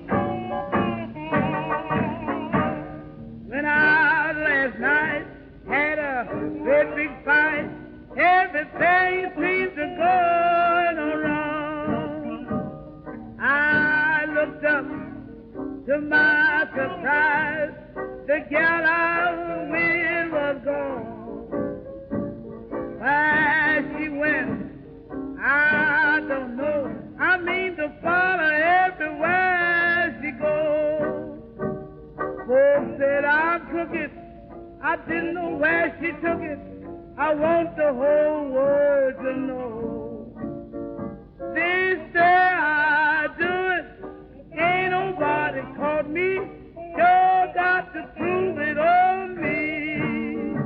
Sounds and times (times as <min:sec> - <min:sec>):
Jazz: 0:00.0 - 0:50.6.